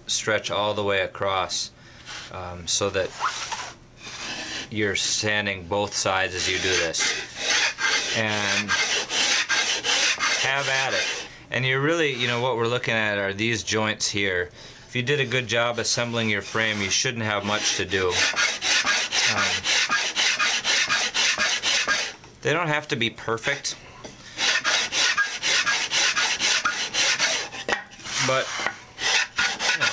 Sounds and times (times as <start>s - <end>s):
Filing (rasp): 3.1s - 4.7s, 6.3s - 11.3s, 16.2s - 22.2s, 24.4s - 29.9s
Rub: 3.1s - 4.7s, 6.4s - 11.3s, 12.1s - 12.5s, 15.2s - 22.1s, 24.4s - 29.9s.